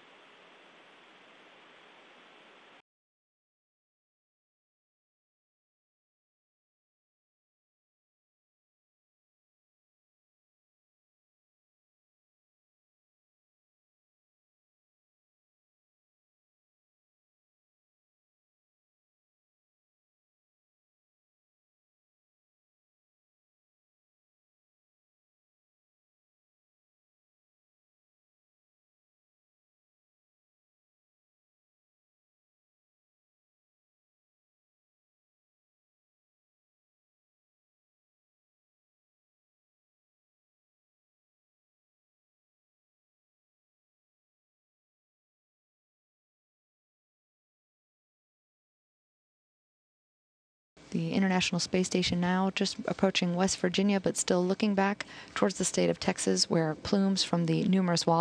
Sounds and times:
Speech: 50.9 - 58.2.

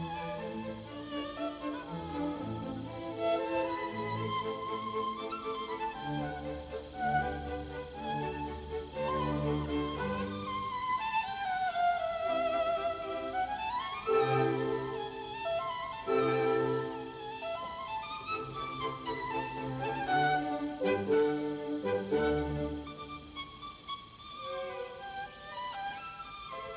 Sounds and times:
Violin, fiddle: 0.0 - 26.7.

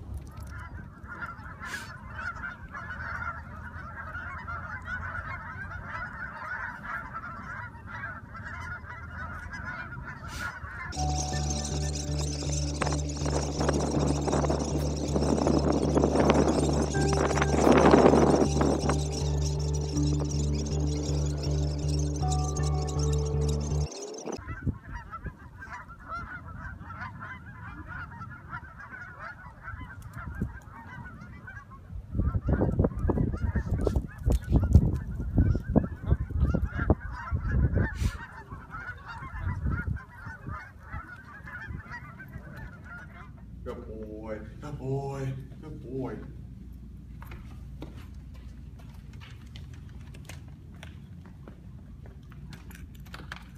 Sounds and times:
Honk: 0.6 - 11.0, 24.4 - 43.5.

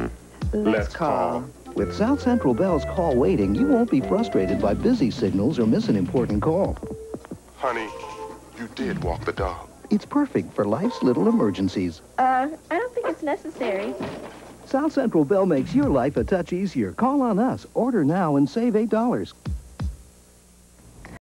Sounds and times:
Speech: 0.6 - 6.8, 7.6 - 14.0, 14.7 - 19.4.

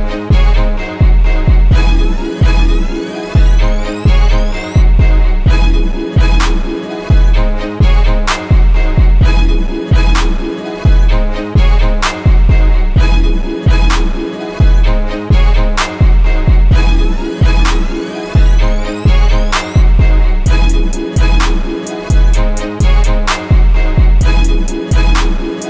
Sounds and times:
Music: 0.0 - 25.6.

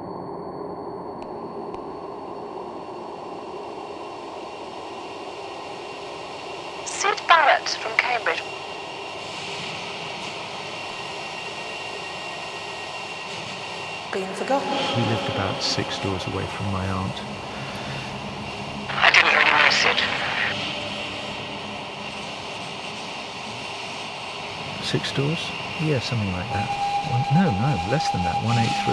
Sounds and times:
Speech: 6.9 - 8.4, 14.1 - 17.3, 18.9 - 20.6, 24.8 - 28.9.

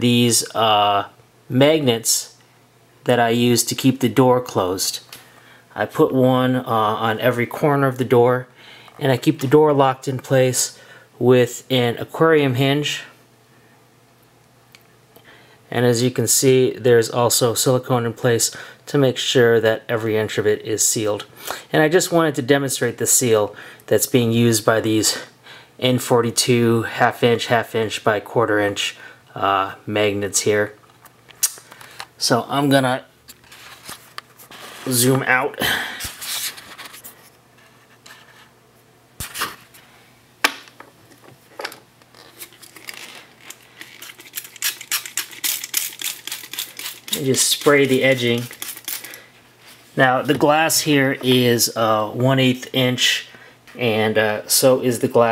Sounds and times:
Speech: 0.0 - 2.4, 3.0 - 5.1, 5.8 - 13.2, 15.7 - 30.8, 32.2 - 33.1, 34.8 - 35.8, 47.1 - 48.5, 50.0 - 55.3.

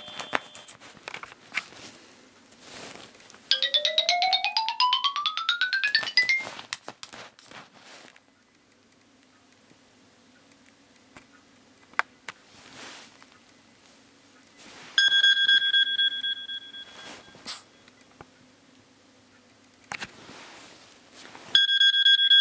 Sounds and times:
Alarm clock: 3.5 - 6.5, 15.0 - 17.7, 21.6 - 22.4
Music: 3.5 - 6.5.

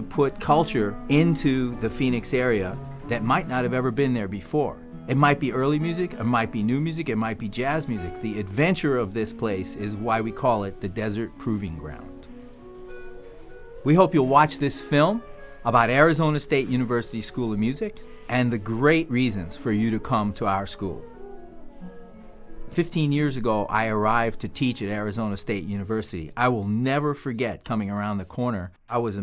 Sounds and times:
Speech: 0.0 - 12.2, 13.9 - 21.0, 22.7 - 29.2
Music: 0.0 - 29.2.

